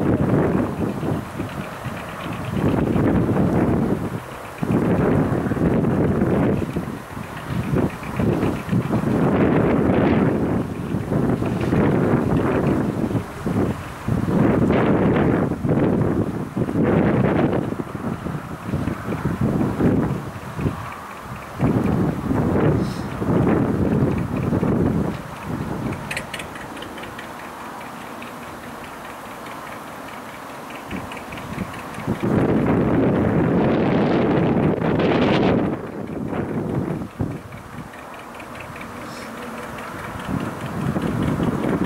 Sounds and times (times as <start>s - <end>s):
Wind noise (microphone): 0.0s - 26.6s, 30.9s - 38.0s, 39.8s - 41.8s
Motorboat, speedboat: 0.0s - 41.8s.